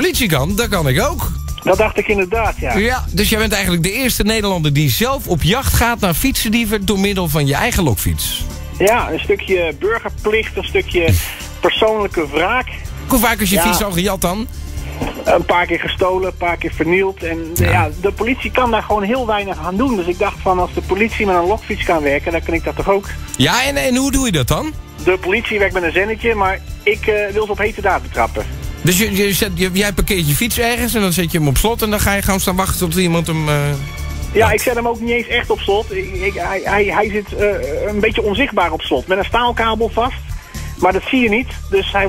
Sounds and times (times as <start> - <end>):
Speech: 0.0 - 14.5, 15.2 - 40.2, 40.8 - 42.0
Music: 0.0 - 42.0.